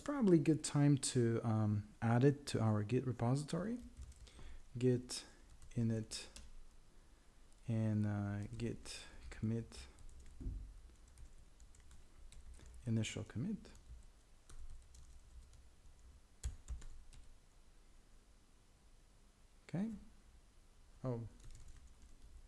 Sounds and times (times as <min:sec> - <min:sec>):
Speech: 0:00.0 - 0:03.9, 0:04.8 - 0:06.4, 0:07.7 - 0:09.9, 0:12.8 - 0:13.8, 0:19.7 - 0:20.1, 0:21.0 - 0:21.4
Computer keyboard: 0:03.8 - 0:04.3, 0:10.0 - 0:12.8, 0:13.7 - 0:17.3, 0:21.4 - 0:22.4.